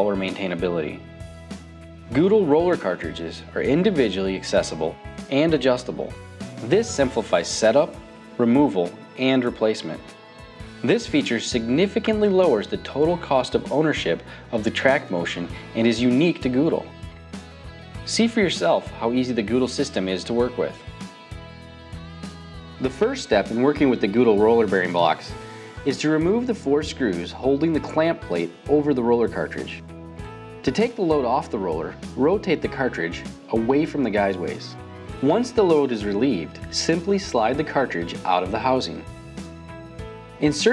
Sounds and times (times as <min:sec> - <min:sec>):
Speech: 0:00.0 - 0:01.0, 0:02.1 - 0:10.1, 0:10.8 - 0:17.0, 0:18.1 - 0:20.8, 0:22.8 - 0:29.8, 0:30.6 - 0:39.1, 0:40.4 - 0:40.7.